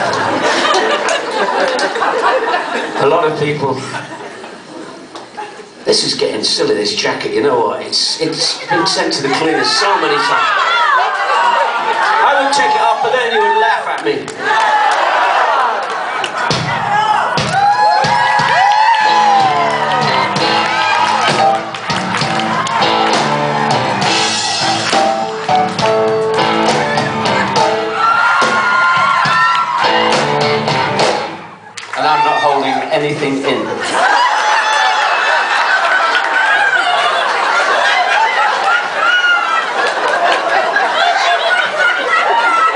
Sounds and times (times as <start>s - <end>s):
Speech: 3.0s - 4.0s, 5.9s - 10.5s, 12.2s - 14.3s, 32.0s - 33.8s
Music: 17.4s - 31.6s.